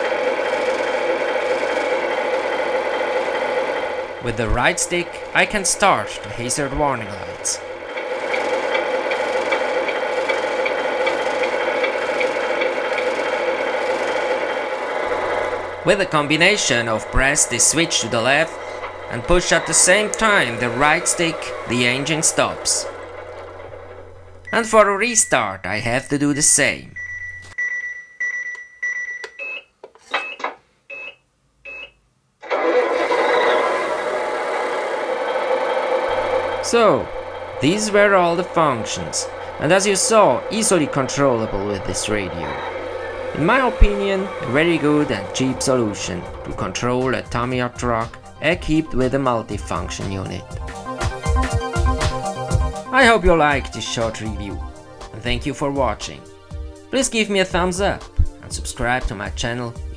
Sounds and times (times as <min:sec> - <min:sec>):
Speech: 0:04.2 - 0:07.6, 0:15.8 - 0:22.9, 0:24.5 - 0:27.0, 0:36.6 - 0:42.7, 0:43.4 - 0:50.5, 0:52.9 - 0:56.2, 0:56.9 - 0:59.8.